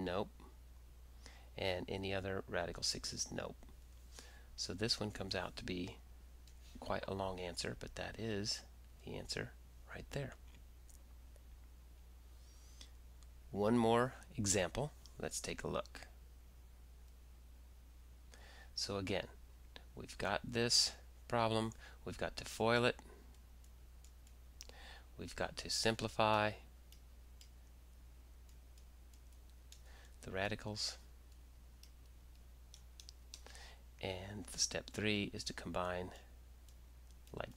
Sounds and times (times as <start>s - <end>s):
Speech: 0.0s - 0.4s, 1.6s - 3.6s, 4.6s - 6.0s, 6.8s - 10.4s, 13.5s - 16.2s, 18.8s - 19.4s, 20.0s - 23.0s, 25.2s - 26.7s, 30.2s - 31.1s, 34.0s - 36.3s, 37.3s - 37.5s.